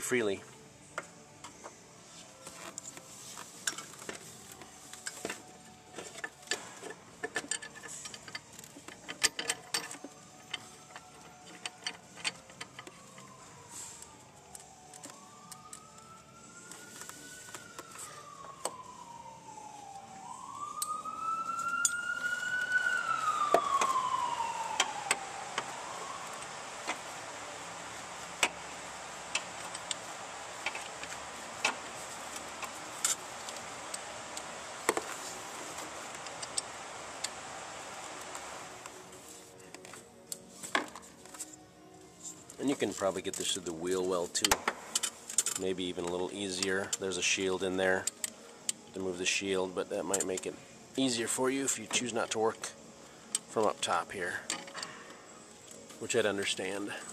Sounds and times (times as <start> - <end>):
Police car (siren): 7.6 - 39.3.